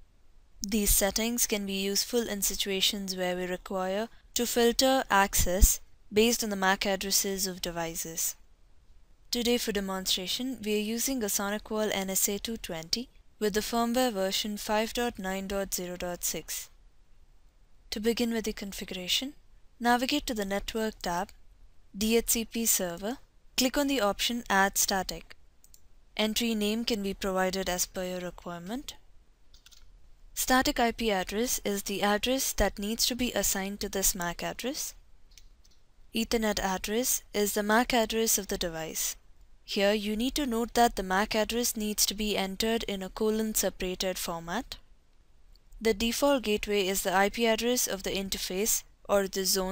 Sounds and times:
Speech: 0.6 - 8.4, 9.3 - 16.7, 17.9 - 21.4, 22.0 - 25.4, 26.2 - 29.0, 30.4 - 35.0, 36.2 - 44.8, 45.8 - 49.7.

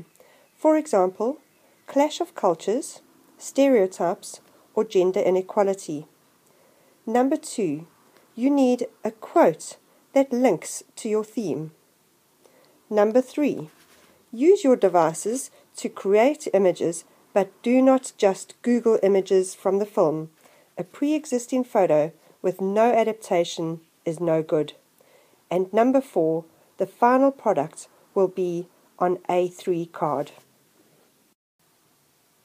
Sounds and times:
Speech: 0.6 - 6.1, 7.1 - 11.8, 12.9 - 13.7, 14.4 - 24.8, 25.5 - 30.4.

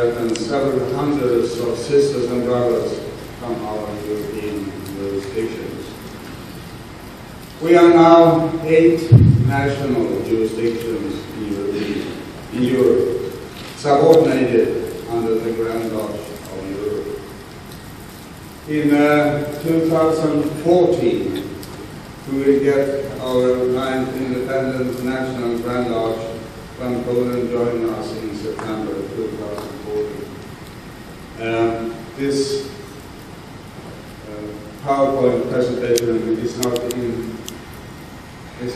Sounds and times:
Male speech, man speaking: 0.0 - 6.0, 7.6 - 17.2, 18.7 - 21.6, 22.3 - 30.3, 31.4 - 32.7, 34.2 - 37.4
Narration, monologue: 0.0 - 38.7.

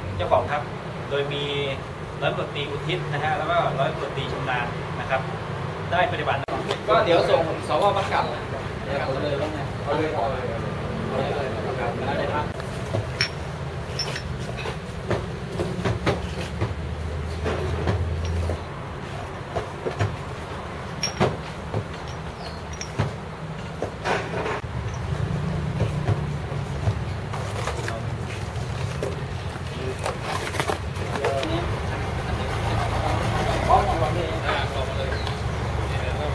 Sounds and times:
Speech: 31.0 - 36.3.

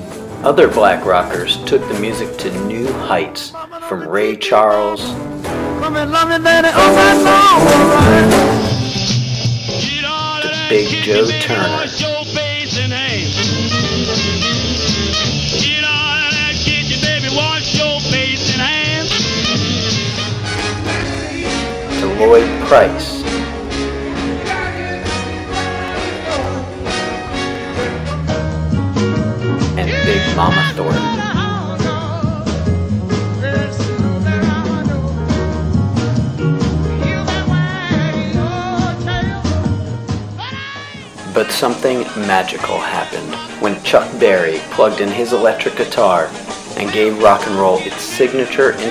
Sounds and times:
Rock and roll: 0.0 - 48.9
Speech: 0.4 - 5.2, 10.4 - 12.0, 22.0 - 23.2, 29.8 - 31.2, 41.3 - 48.9
Musical instrument: 5.1 - 9.3, 10.4 - 12.0, 19.2 - 32.1.

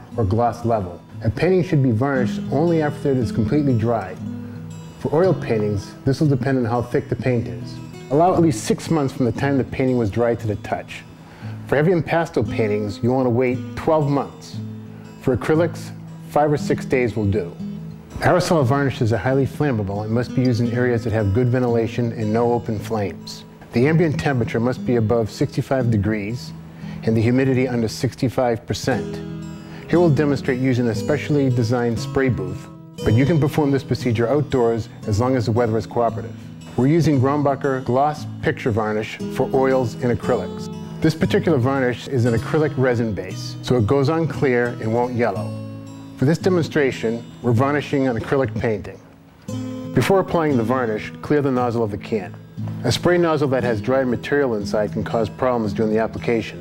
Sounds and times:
Music: 0.0 - 56.6
Speech: 0.1 - 4.2, 5.0 - 11.1, 11.7 - 14.6, 15.2 - 17.6, 18.2 - 29.3, 29.9 - 45.5, 46.2 - 49.1, 50.0 - 56.6.

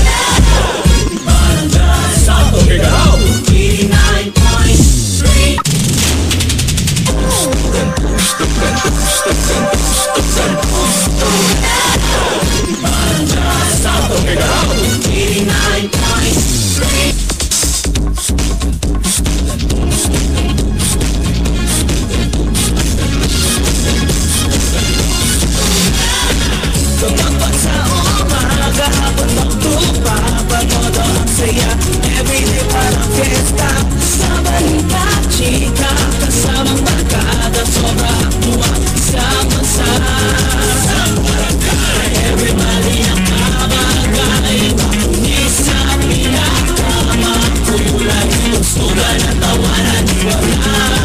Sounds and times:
Music: 0.0 - 51.0.

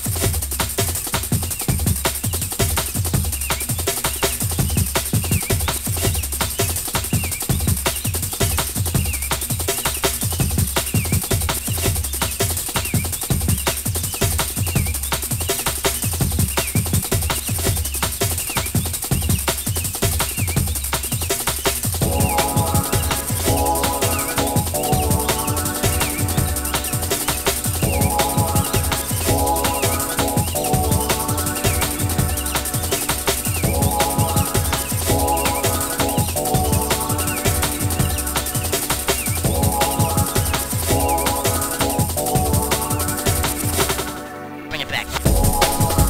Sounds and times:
Bass drum: 0.0 - 9.6, 10.2 - 44.0, 45.2 - 46.0
Drum kit: 0.0 - 44.3, 44.9 - 46.0.

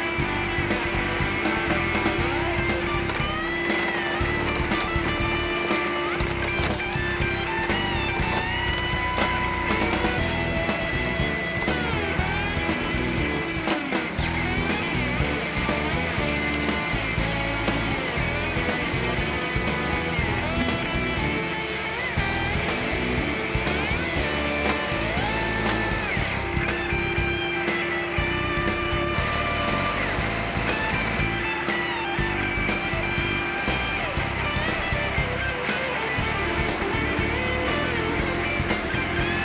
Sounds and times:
Music: 0.0 - 39.4.

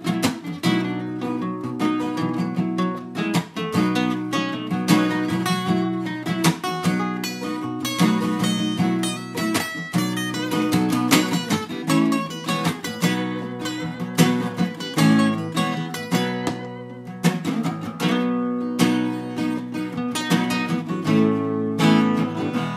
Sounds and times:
Acoustic guitar: 0.0 - 22.7
Strum: 0.0 - 22.7.

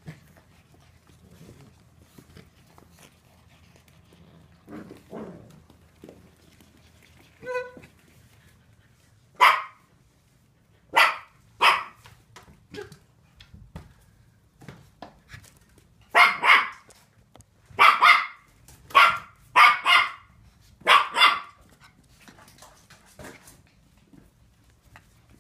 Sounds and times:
Bow-wow: 9.4 - 9.8, 10.9 - 12.0, 16.1 - 16.9, 17.8 - 20.3, 20.9 - 21.6.

